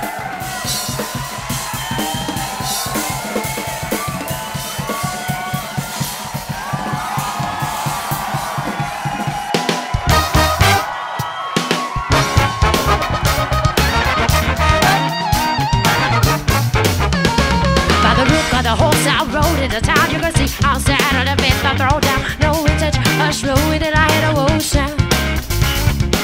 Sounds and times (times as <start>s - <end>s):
Music: 0.0s - 26.2s.